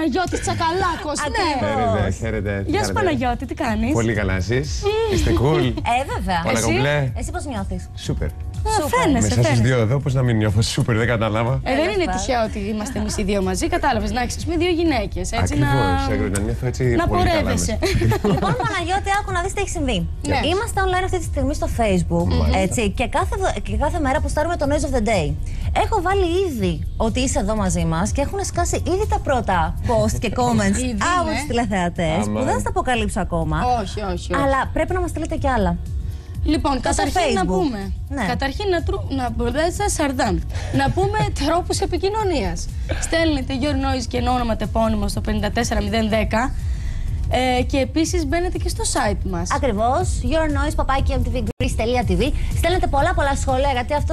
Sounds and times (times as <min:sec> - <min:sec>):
Music: 0:00.0 - 0:54.1
Speech: 0:00.1 - 0:05.8, 0:15.3 - 0:19.1, 0:20.3 - 0:20.7, 0:22.2 - 0:23.0, 0:29.9 - 0:35.4.